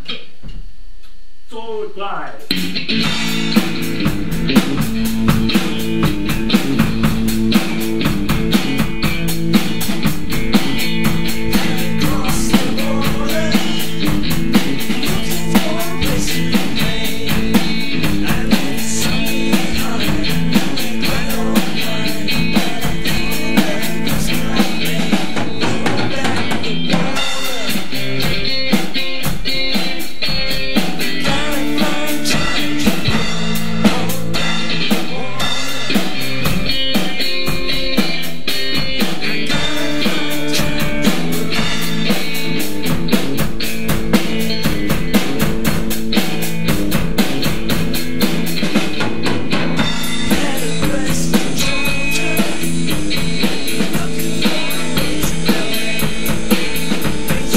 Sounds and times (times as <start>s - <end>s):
Music: 2.4s - 57.5s.